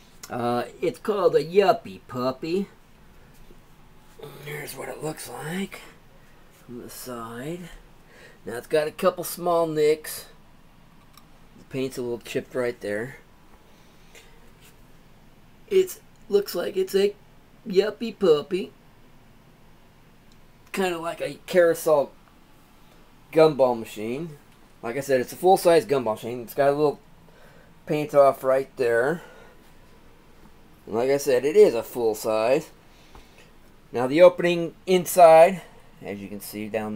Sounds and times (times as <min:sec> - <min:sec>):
Speech: 0:00.3 - 0:02.8, 0:04.2 - 0:06.0, 0:06.7 - 0:07.8, 0:08.4 - 0:10.4, 0:11.6 - 0:13.2, 0:15.7 - 0:18.8, 0:20.7 - 0:22.2, 0:23.3 - 0:27.0, 0:27.9 - 0:29.4, 0:30.9 - 0:32.8, 0:33.9 - 0:36.9.